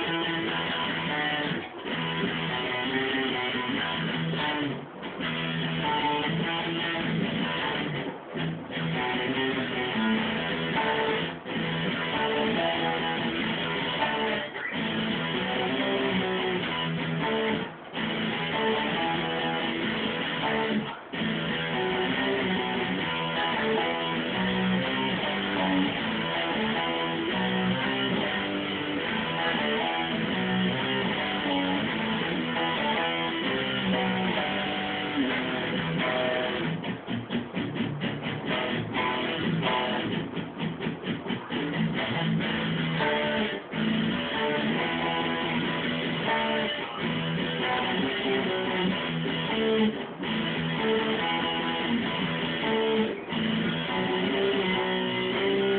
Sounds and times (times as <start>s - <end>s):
Electric guitar: 0.0s - 55.7s.